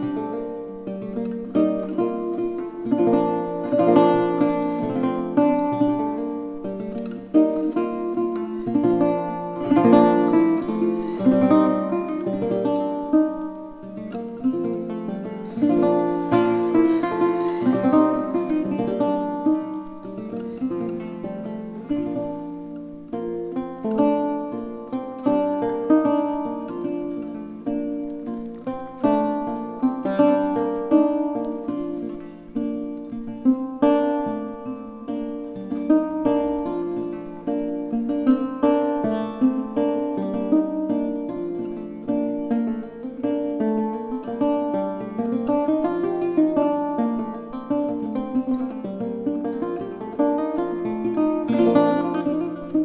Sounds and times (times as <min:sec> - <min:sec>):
Acoustic guitar: 0:00.0 - 0:52.8.